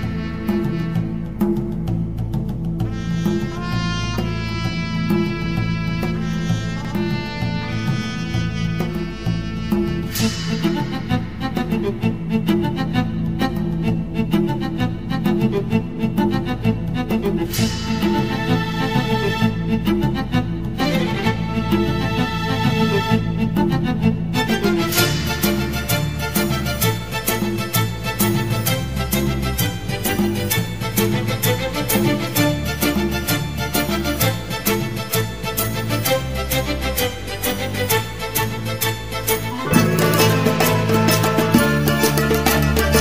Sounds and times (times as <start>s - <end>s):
Music: 0.0s - 43.0s.